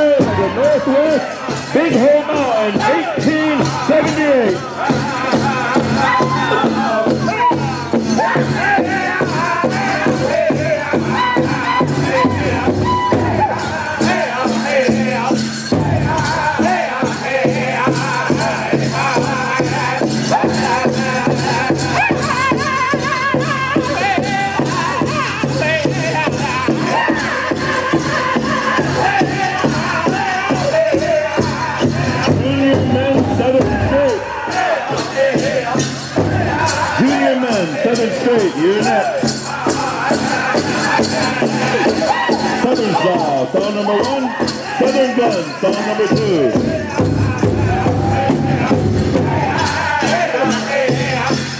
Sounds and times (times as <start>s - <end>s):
Speech: 0.0s - 4.7s, 37.0s - 39.2s, 42.6s - 46.6s
Music: 0.0s - 51.5s.